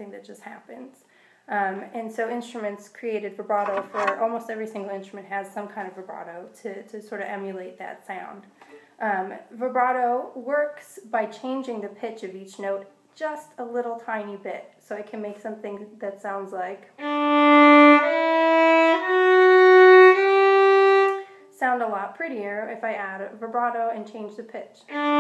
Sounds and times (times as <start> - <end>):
Speech: 0.0 - 16.9, 21.6 - 24.9.